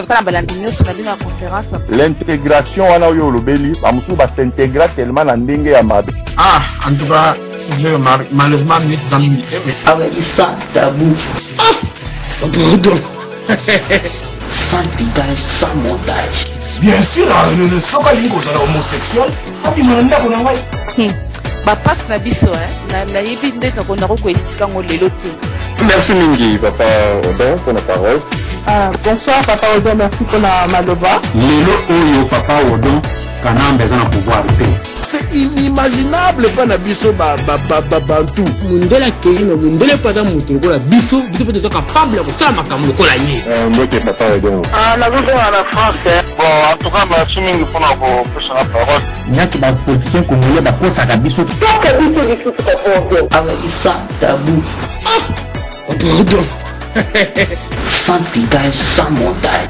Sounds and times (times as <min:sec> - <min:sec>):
Music: 0:00.0 - 0:59.6.